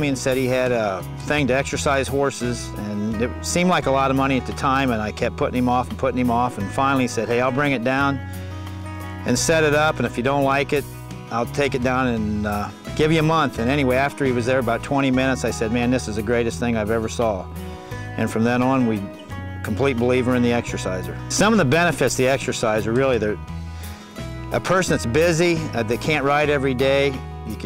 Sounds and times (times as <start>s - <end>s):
Speech: 0.0s - 8.2s, 9.2s - 17.4s, 18.2s - 19.1s, 19.7s - 23.4s, 24.5s - 27.6s
Music: 0.0s - 27.6s.